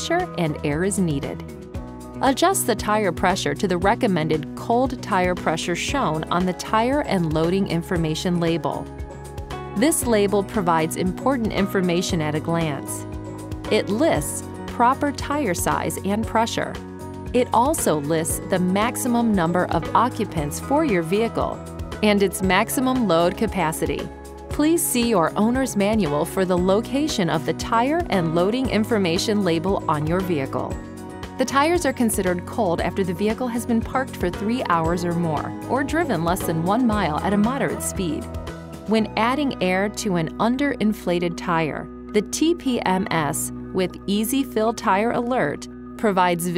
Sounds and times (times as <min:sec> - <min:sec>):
Speech: 0:00.0 - 0:01.5, 0:02.2 - 0:08.8, 0:09.8 - 0:13.0, 0:13.7 - 0:16.8, 0:17.4 - 0:30.8, 0:31.4 - 0:38.3, 0:38.9 - 0:46.5
Music: 0:00.0 - 0:46.5.